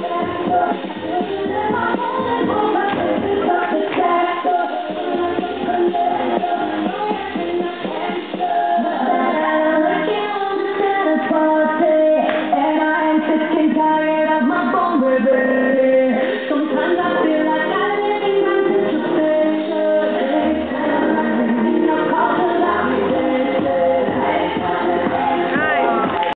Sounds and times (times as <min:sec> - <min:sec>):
Music: 0:00.0 - 0:26.3
Speech: 0:25.5 - 0:26.3.